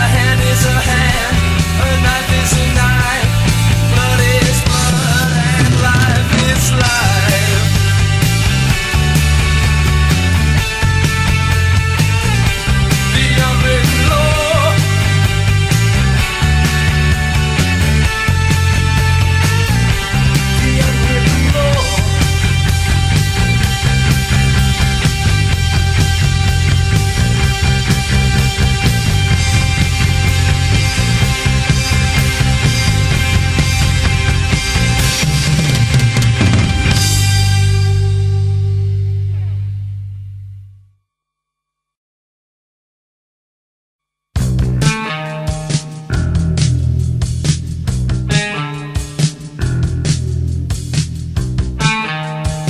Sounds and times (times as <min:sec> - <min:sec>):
Progressive rock: 0:00.0 - 0:40.6, 0:44.4 - 0:52.7.